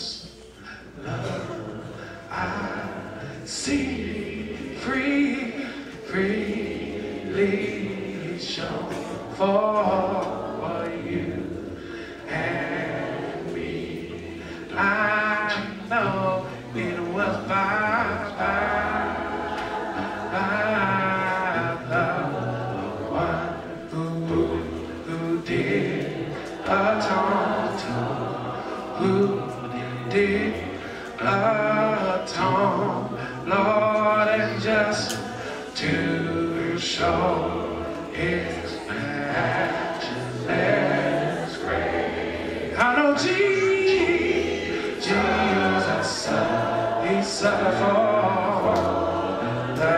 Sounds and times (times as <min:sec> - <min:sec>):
Male singing: 0:00.0 - 0:41.9, 0:42.7 - 0:49.9
Choir: 0:00.0 - 0:49.9.